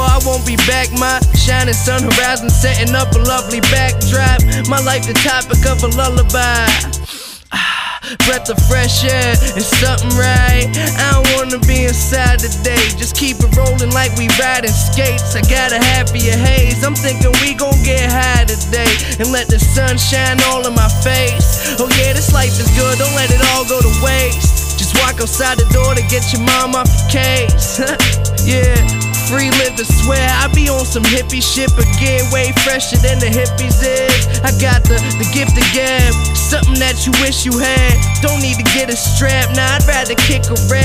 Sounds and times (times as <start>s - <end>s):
Music: 0.0s - 40.8s.